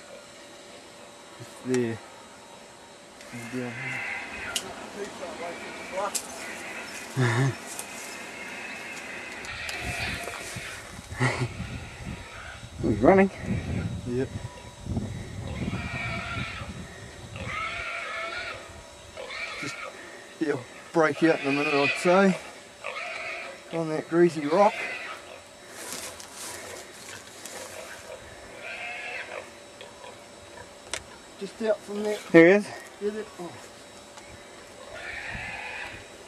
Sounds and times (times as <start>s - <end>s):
Oink: 3.4s - 4.6s, 17.4s - 18.6s, 19.2s - 19.9s, 21.2s - 23.8s, 24.4s - 25.4s, 27.7s - 30.7s, 34.9s - 36.0s.